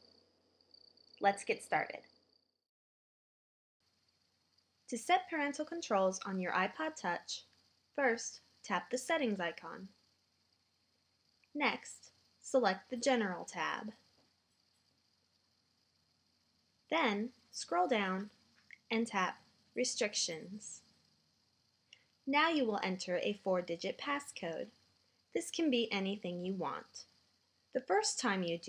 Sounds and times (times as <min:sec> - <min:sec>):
Speech: 0:01.2 - 0:02.0, 0:04.9 - 0:07.4, 0:08.0 - 0:09.9, 0:11.6 - 0:14.0, 0:16.9 - 0:18.3, 0:18.9 - 0:20.8, 0:22.3 - 0:24.7, 0:25.4 - 0:27.0, 0:27.8 - 0:28.6.